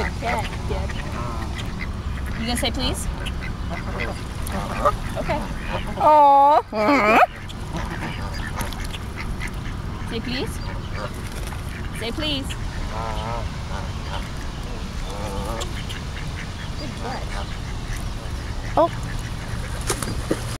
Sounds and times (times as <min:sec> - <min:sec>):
Honk: 0:00.0 - 0:06.0, 0:06.9 - 0:12.1, 0:12.7 - 0:19.7.